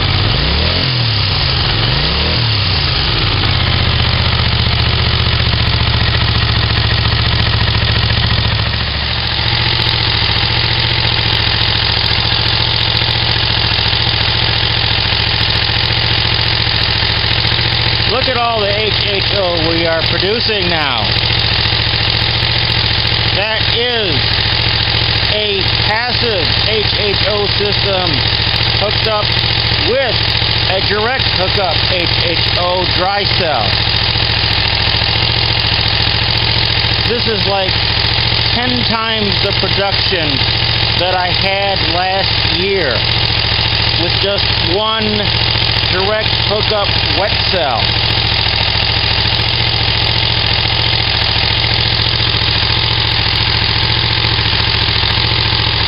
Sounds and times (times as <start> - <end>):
Motorcycle: 0.0 - 55.8
Outside, rural or natural: 8.0 - 55.8
Speech: 18.1 - 21.1, 23.4 - 24.2, 25.3 - 28.2, 28.8 - 33.8, 37.1 - 37.8, 38.6 - 40.4, 41.0 - 43.0, 44.0 - 45.3, 45.9 - 47.9.